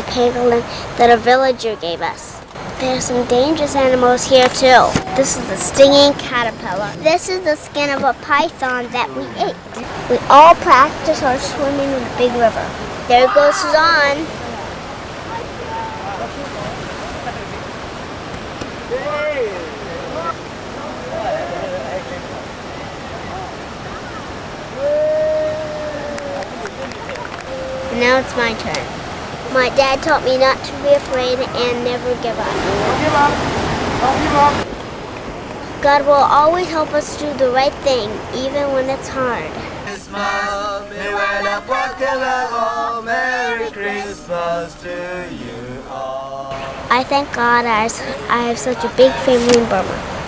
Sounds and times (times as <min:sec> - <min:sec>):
Waves, surf: 0:00.0 - 0:50.2.